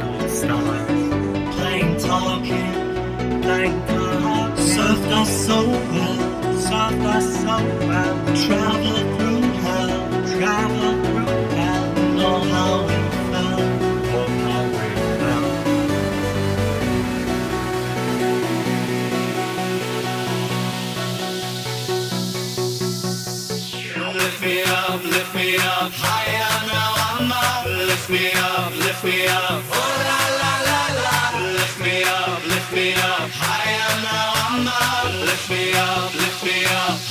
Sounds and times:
Music: 0.0s - 37.1s.

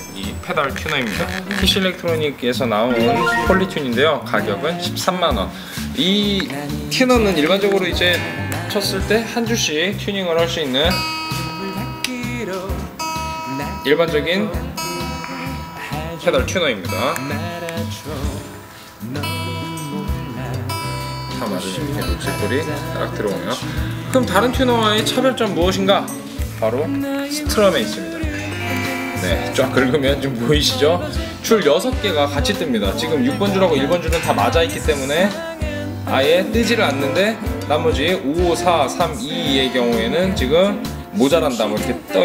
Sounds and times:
Speech: 0.0s - 11.0s, 13.5s - 18.4s, 21.3s - 28.2s, 29.2s - 35.5s, 36.1s - 42.2s
Music: 0.0s - 42.2s
Electronic tuner: 28.3s - 29.7s.

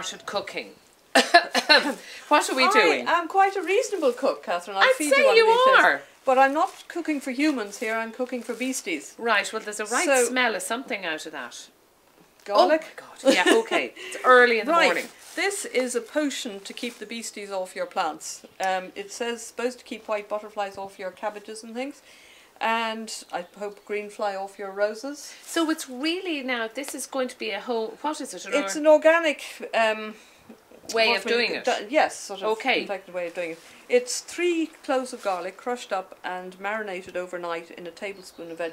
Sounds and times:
Speech: 2.3s - 11.7s, 12.5s - 22.0s, 22.6s - 30.1s, 30.9s - 38.7s.

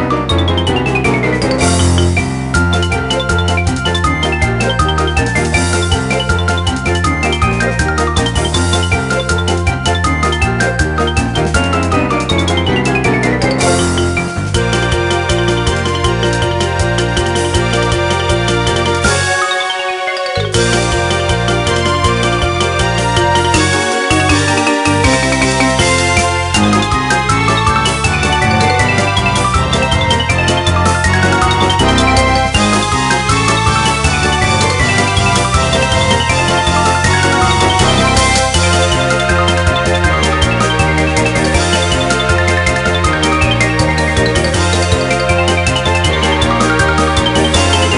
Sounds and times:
Video game music: 0.0s - 47.9s.

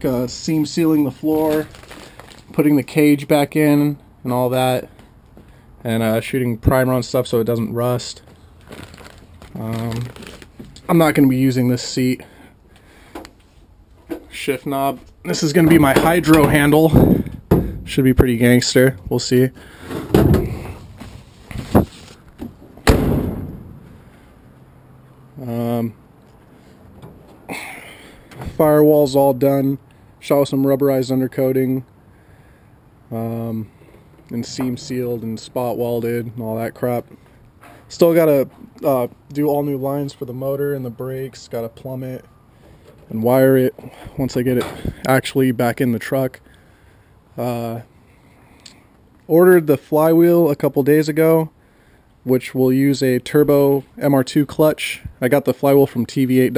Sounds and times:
Speech: 0.0s - 1.7s, 2.5s - 4.9s, 5.8s - 8.2s, 9.5s - 10.2s, 10.8s - 12.3s, 14.3s - 17.0s, 17.9s - 19.6s, 25.4s - 26.0s, 28.6s - 31.9s, 33.1s - 33.7s, 34.3s - 37.1s, 37.9s - 42.3s, 43.1s - 46.4s, 47.4s - 47.9s, 49.3s - 51.5s, 52.3s - 56.5s.

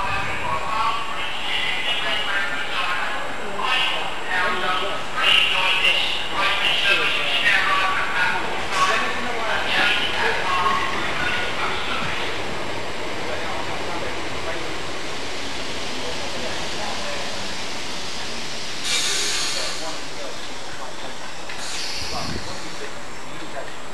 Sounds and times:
Speech: 0.0s - 14.8s, 15.9s - 17.5s, 19.0s - 23.9s
Train: 0.0s - 23.9s.

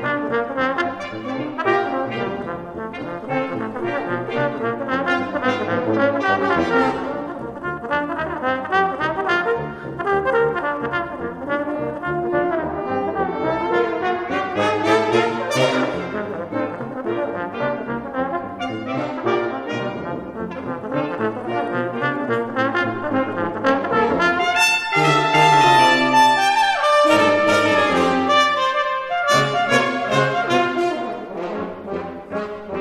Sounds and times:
Trombone: 0.0s - 32.8s.

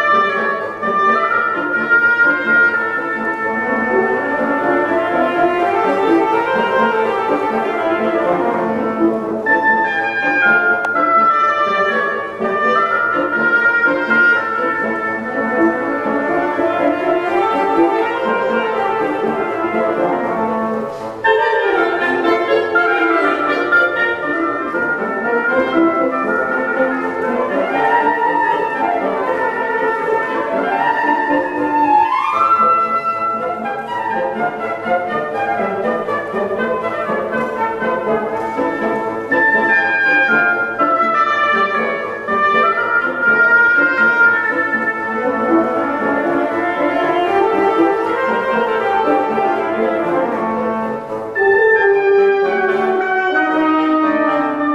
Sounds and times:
Music: 0.0s - 54.7s.

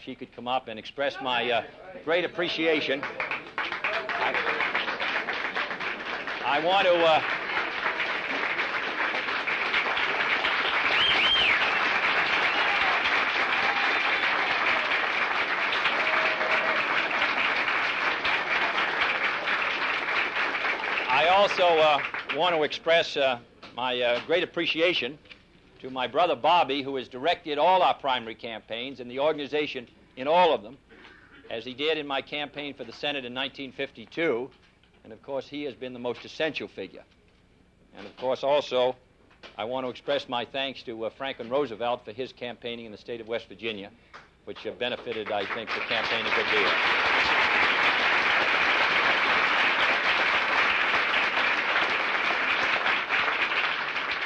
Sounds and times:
Male speech, man speaking: 0.0s - 3.2s, 3.9s - 4.7s, 6.4s - 7.2s, 21.1s - 25.2s, 25.8s - 30.8s, 31.5s - 37.1s, 38.0s - 39.0s, 39.6s - 43.9s, 44.5s - 46.8s
Narration, monologue: 0.0s - 3.5s, 6.4s - 7.3s, 21.1s - 46.8s.

